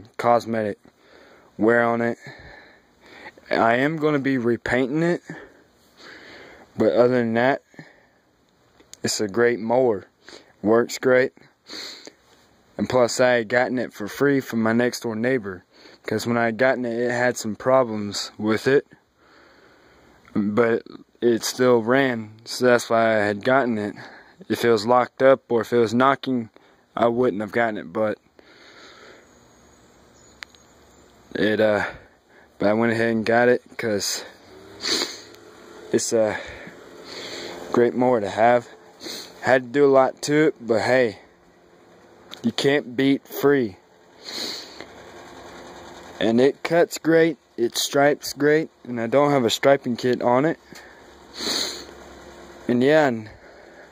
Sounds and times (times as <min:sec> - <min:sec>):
Speech: 0:00.0 - 0:00.8, 0:01.6 - 0:02.4, 0:03.4 - 0:05.5, 0:06.8 - 0:07.9, 0:09.0 - 0:11.5, 0:12.8 - 0:19.0, 0:20.3 - 0:28.2, 0:31.3 - 0:34.4, 0:35.9 - 0:36.6, 0:37.7 - 0:38.8, 0:39.4 - 0:41.3, 0:42.4 - 0:43.8, 0:46.2 - 0:50.6, 0:52.7 - 0:53.4.